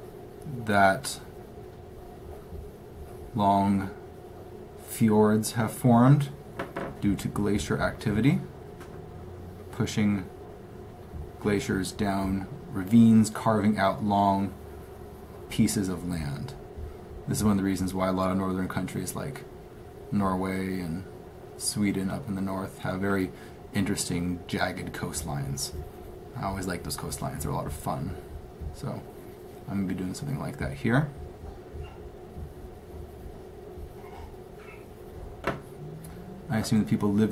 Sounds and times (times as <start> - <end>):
Speech: 0.4 - 1.3, 3.3 - 4.0, 4.8 - 6.4, 7.0 - 8.5, 9.7 - 10.3, 11.4 - 14.6, 15.5 - 16.6, 17.3 - 19.5, 20.1 - 25.8, 26.4 - 29.1, 29.7 - 31.2, 36.0 - 37.3.